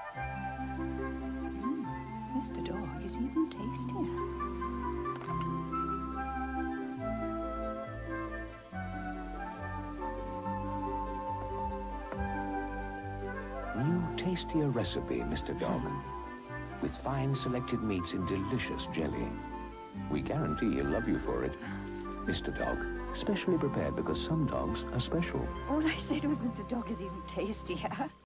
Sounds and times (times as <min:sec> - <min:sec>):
Music: 0:00.0 - 0:28.2
Speech: 0:13.8 - 0:16.0, 0:16.8 - 0:19.3, 0:20.1 - 0:21.6, 0:22.3 - 0:28.2.